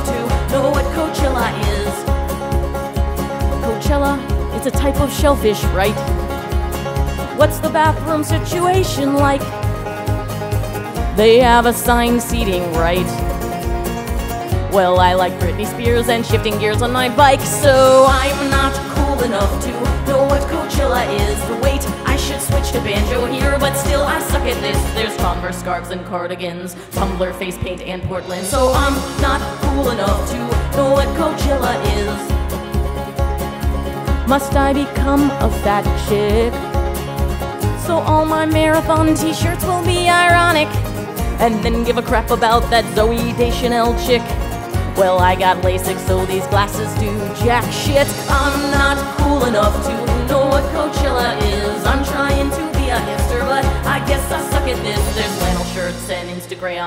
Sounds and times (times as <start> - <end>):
Music: 0.0 - 56.8.